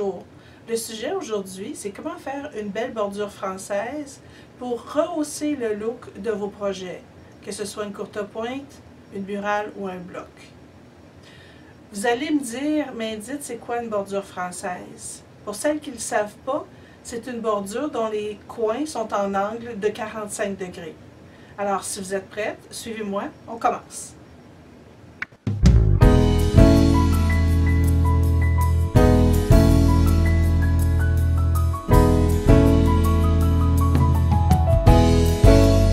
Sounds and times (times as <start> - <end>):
Speech: 0.0 - 10.6, 11.9 - 21.0, 21.6 - 24.2
Music: 25.5 - 35.9.